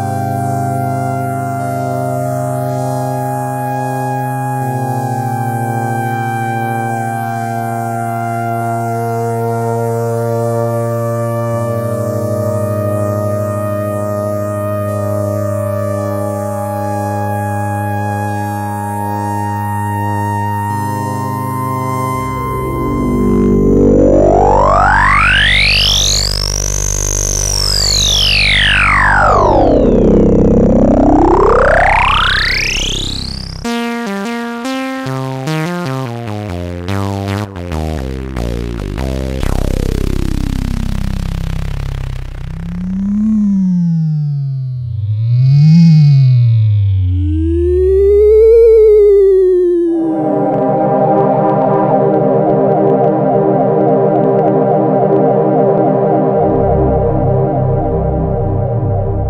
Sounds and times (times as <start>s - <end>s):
Synthesizer: 0.0s - 59.2s.